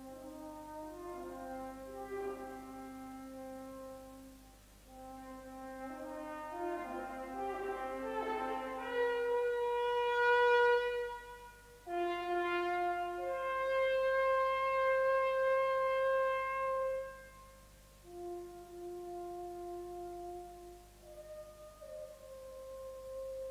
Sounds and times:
French horn: 0.0s - 23.5s.

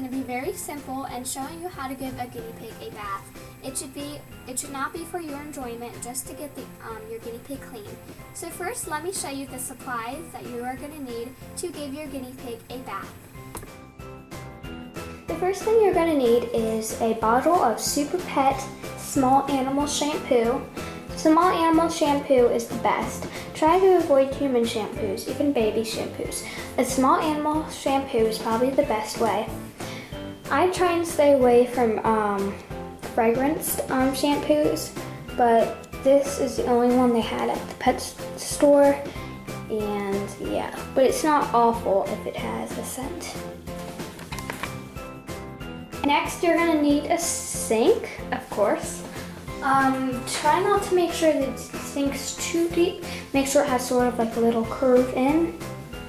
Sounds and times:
Speech: 0.0s - 13.2s, 15.3s - 29.5s, 30.5s - 43.4s, 46.0s - 49.0s, 49.6s - 55.6s
Music: 0.0s - 56.0s.

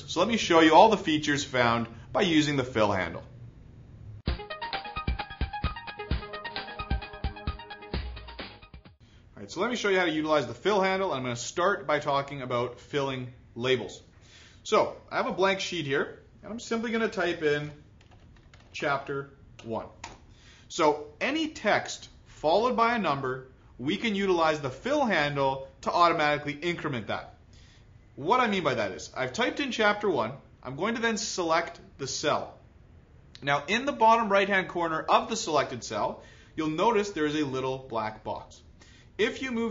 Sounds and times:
Speech: 0.0s - 3.3s, 9.4s - 17.8s, 18.7s - 20.0s, 20.7s - 27.4s, 28.2s - 32.6s, 33.4s - 39.7s.

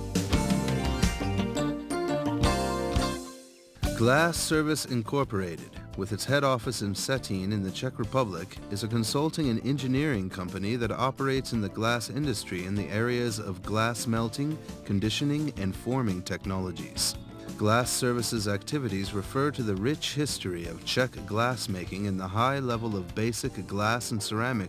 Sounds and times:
Music: 0.0s - 24.6s
Speech: 3.9s - 24.6s.

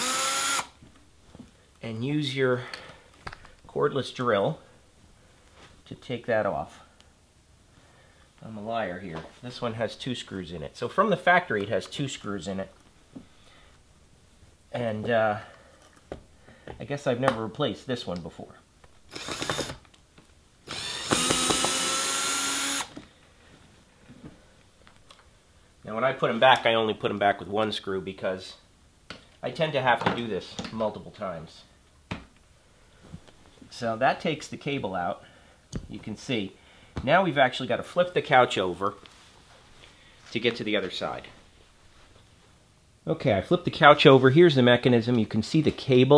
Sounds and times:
Inside, small room: 0.0s - 46.1s
Speech: 1.8s - 2.8s, 3.7s - 4.7s, 5.8s - 7.0s, 8.4s - 12.8s, 14.7s - 15.5s, 16.8s - 18.7s, 25.8s - 28.7s, 29.4s - 31.8s, 33.7s - 39.1s, 40.3s - 41.4s, 43.0s - 46.1s.

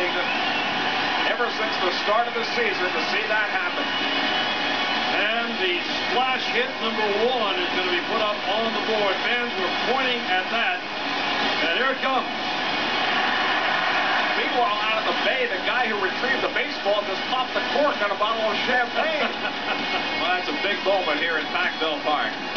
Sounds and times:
Speech: 1.2s - 3.9s, 5.1s - 10.8s, 11.6s - 12.3s, 14.4s - 19.3s, 20.2s - 22.4s.

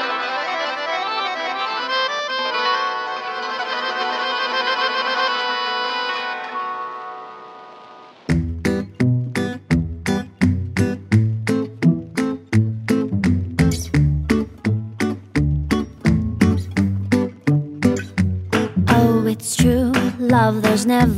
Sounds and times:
Accordion: 0.0s - 7.8s.

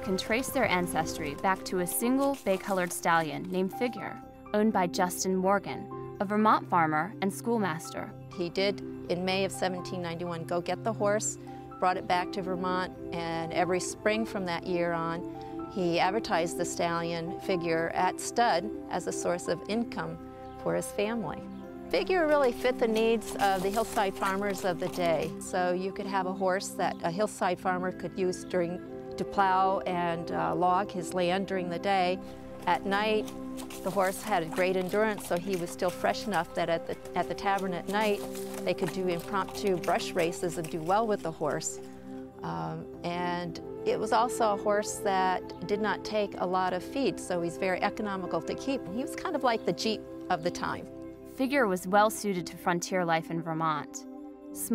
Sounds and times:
Clip-clop: 0.0s - 4.2s, 21.9s - 26.4s, 30.3s - 42.2s
Speech: 0.0s - 33.3s, 33.9s - 41.8s, 42.4s - 54.0s
Music: 0.0s - 54.7s.

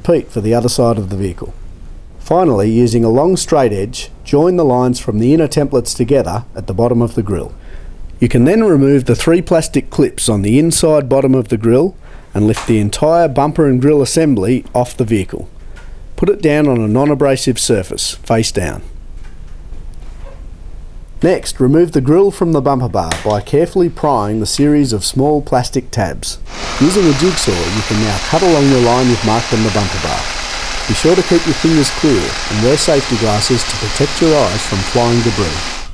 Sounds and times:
Speech: 0.0s - 1.6s, 2.2s - 7.6s, 8.2s - 15.5s, 16.2s - 18.9s, 21.2s - 30.2s, 30.9s - 35.7s.

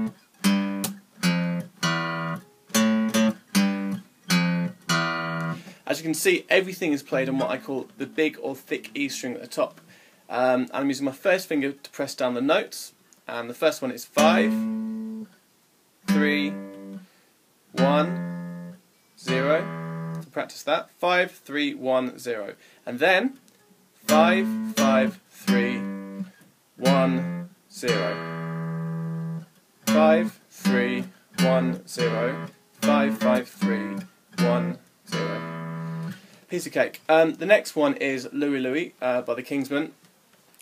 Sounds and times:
Guitar: 0.0s - 6.0s, 7.0s - 9.9s, 14.1s - 15.4s, 16.0s - 17.1s, 17.7s - 20.4s, 23.2s - 37.6s
Speech: 5.8s - 14.6s, 16.1s - 16.6s, 17.8s - 18.2s, 19.2s - 19.7s, 20.3s - 23.4s, 24.1s - 25.9s, 26.8s - 28.2s, 29.9s - 35.5s, 36.5s - 40.0s.

